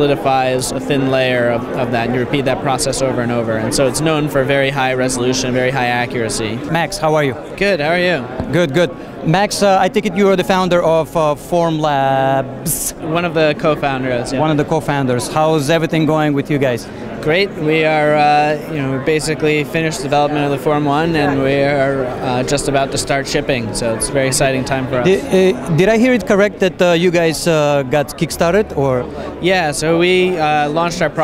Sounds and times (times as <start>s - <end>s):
Inside, public space: 0.0s - 31.2s
Speech: 0.0s - 31.2s.